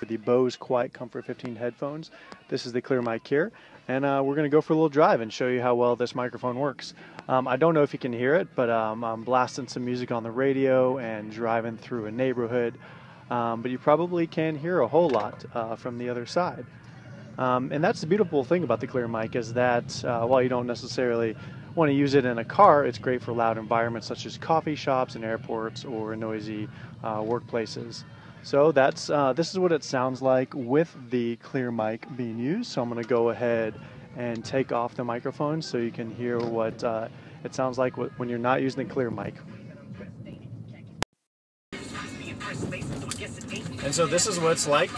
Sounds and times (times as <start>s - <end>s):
Speech: 0.0s - 40.1s, 43.7s - 44.9s.